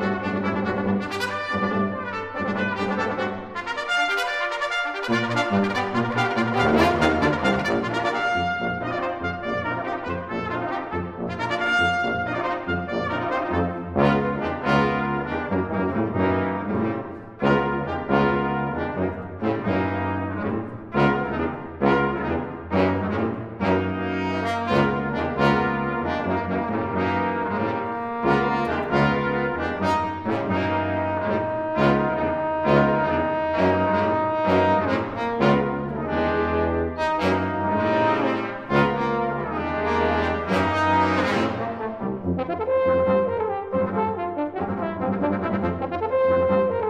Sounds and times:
French horn: 0.0s - 46.9s
Trombone: 0.0s - 46.9s.

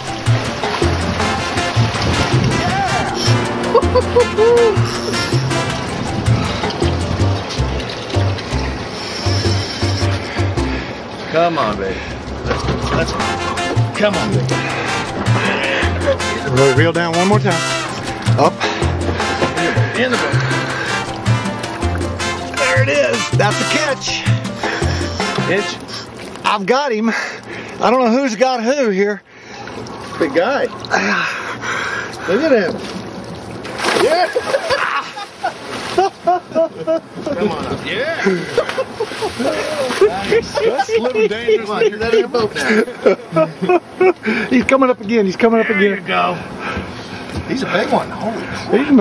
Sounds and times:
Music: 0.0s - 10.9s, 12.9s - 25.9s.

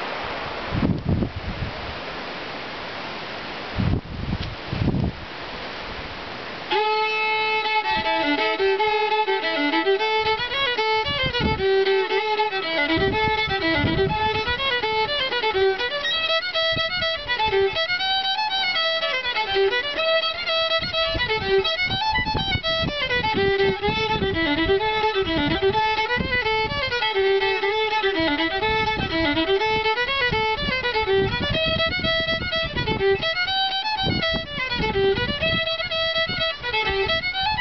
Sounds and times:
Violin, fiddle: 6.7s - 37.6s.

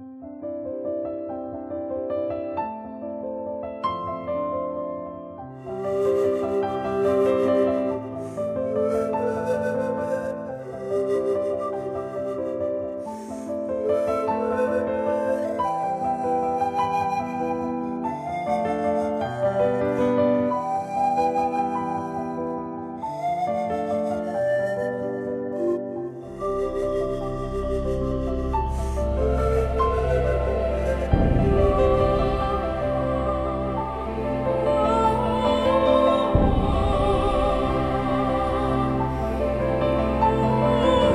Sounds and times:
Music: 0.0s - 41.1s.

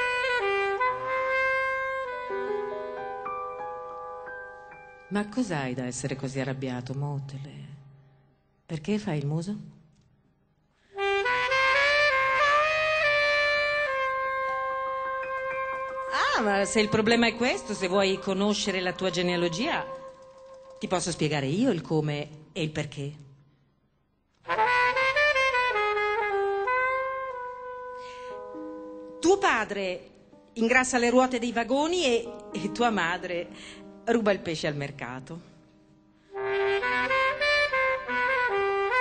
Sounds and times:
Music: 0.0s - 39.0s
Speech: 5.1s - 7.8s, 8.7s - 9.8s, 16.1s - 19.9s, 20.8s - 23.3s, 29.2s - 33.5s, 34.1s - 35.5s.

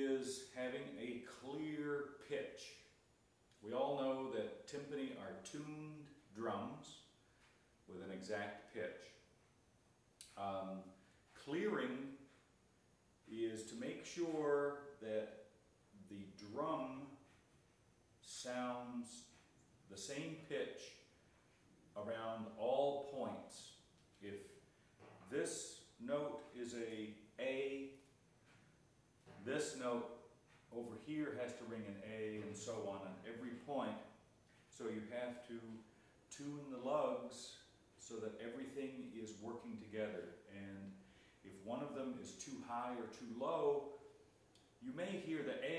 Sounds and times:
Speech: 0.0s - 3.0s, 3.6s - 7.1s, 7.9s - 9.3s, 10.2s - 12.3s, 13.3s - 17.3s, 18.2s - 21.1s, 21.9s - 24.6s, 25.2s - 28.1s, 29.3s - 44.1s, 44.8s - 45.7s.

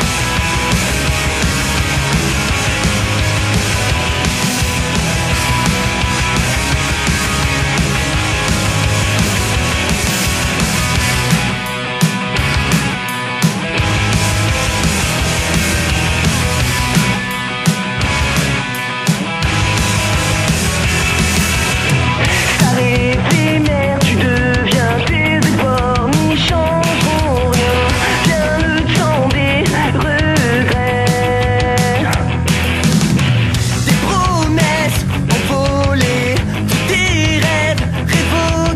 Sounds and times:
Music: 0.0s - 38.7s.

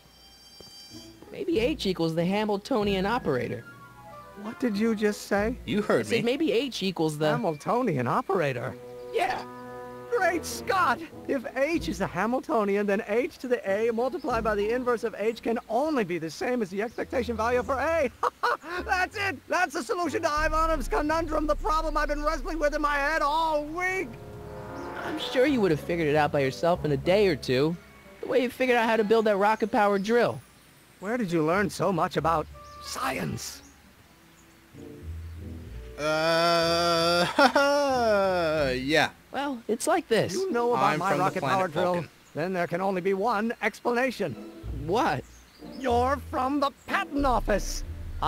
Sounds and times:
Speech: 1.3s - 3.6s, 4.4s - 9.5s, 10.1s - 24.2s, 25.2s - 30.4s, 31.0s - 33.6s, 37.9s - 48.2s.

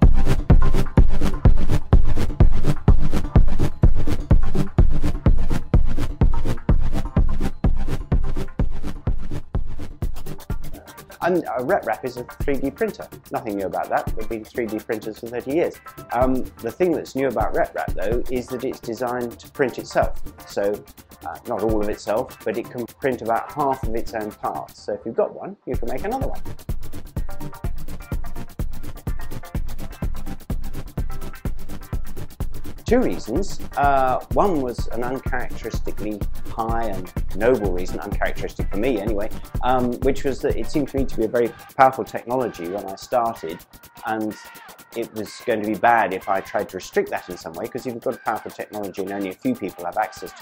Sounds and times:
Music: 0.0s - 50.4s
Speech: 11.2s - 26.4s, 32.9s - 44.4s, 45.0s - 50.4s.

